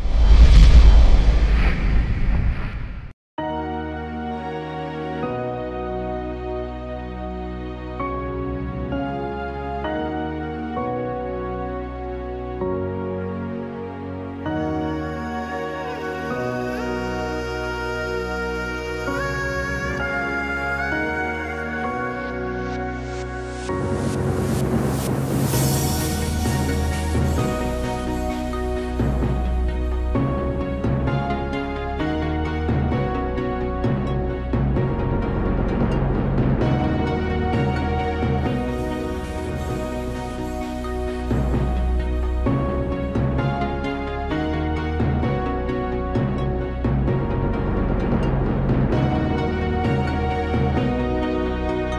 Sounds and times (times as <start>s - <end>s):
Music: 0.0s - 1.4s, 3.4s - 51.9s.